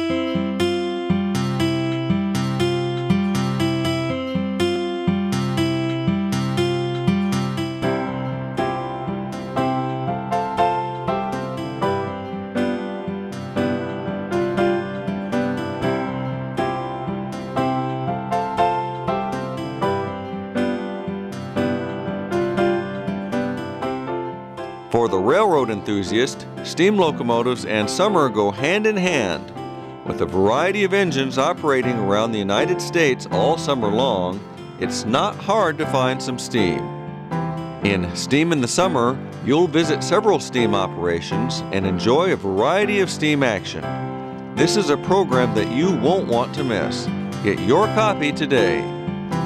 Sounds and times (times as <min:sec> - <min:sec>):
Music: 0:00.0 - 0:49.4
Speech: 0:25.0 - 0:29.5, 0:30.1 - 0:36.9, 0:37.8 - 0:43.8, 0:44.6 - 0:48.9.